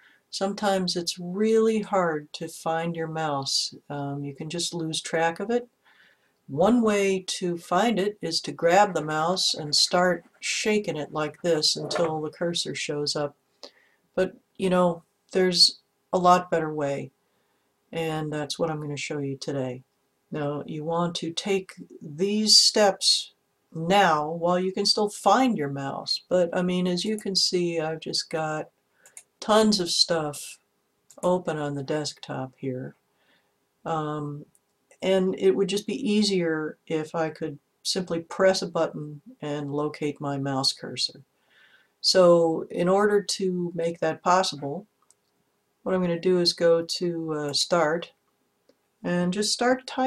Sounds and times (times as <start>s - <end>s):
Speech: 0.3s - 5.7s, 6.5s - 13.4s, 14.2s - 17.2s, 17.9s - 28.7s, 29.4s - 33.0s, 33.8s - 41.3s, 42.0s - 44.9s, 45.8s - 48.2s, 49.0s - 50.0s.